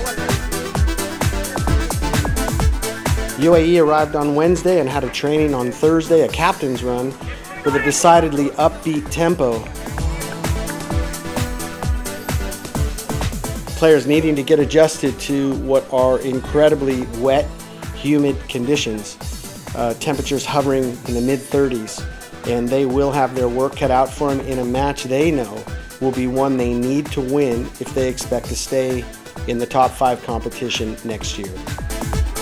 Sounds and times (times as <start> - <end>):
Music: 0.0 - 32.4
Speech: 3.4 - 9.7, 13.8 - 19.2, 19.8 - 31.6.